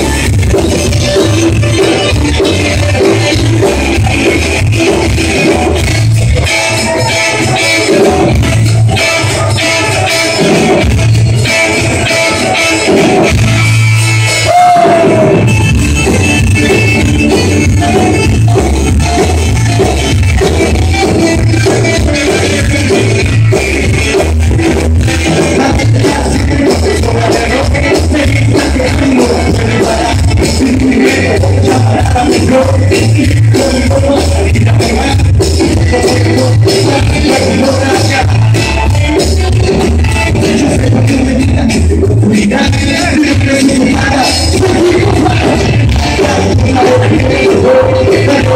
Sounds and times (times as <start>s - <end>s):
Rock and roll: 0.0s - 48.5s.